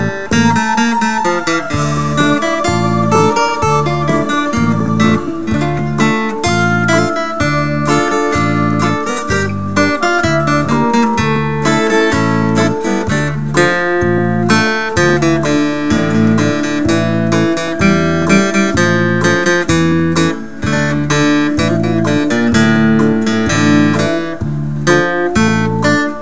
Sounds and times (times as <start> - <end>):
Music: 0.0 - 26.2.